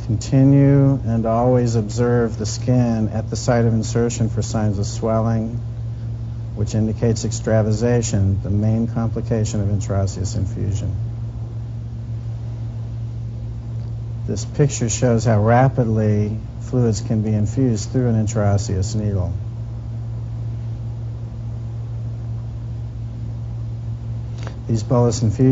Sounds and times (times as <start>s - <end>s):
Speech: 0.0s - 5.6s, 6.6s - 11.0s, 14.3s - 19.4s, 24.7s - 25.5s.